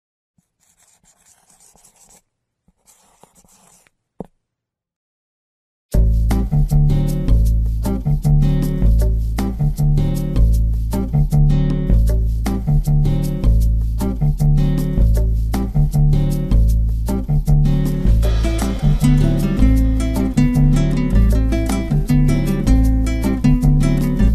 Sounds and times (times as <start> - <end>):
Music: 5.9 - 24.3.